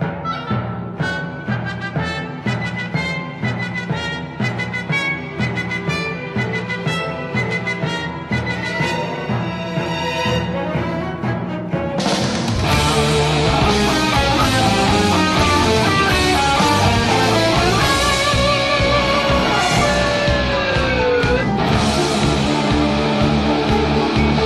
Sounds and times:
Music: 0.0 - 24.4.

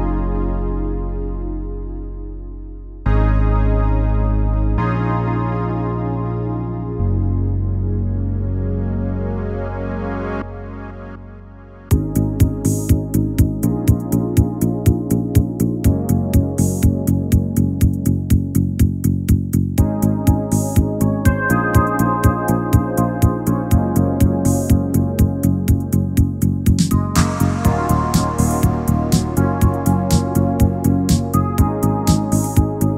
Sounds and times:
Music: 0.0 - 32.9.

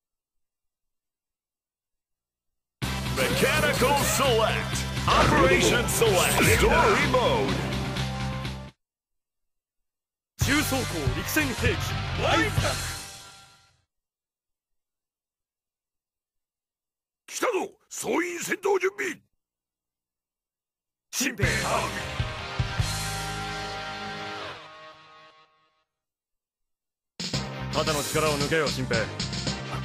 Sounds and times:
Music: 2.8 - 8.8, 10.4 - 13.9, 21.4 - 26.0, 27.2 - 29.8
Speech: 3.2 - 7.6, 10.4 - 12.9, 17.3 - 19.3, 21.1 - 22.0, 27.8 - 29.2.

